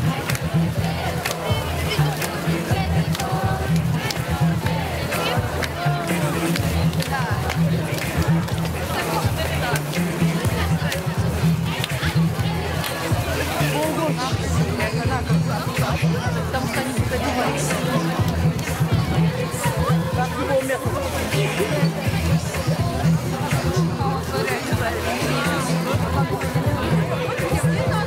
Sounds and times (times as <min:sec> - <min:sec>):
Music: 0:00.0 - 0:28.0
Speech: 0:00.0 - 0:28.0.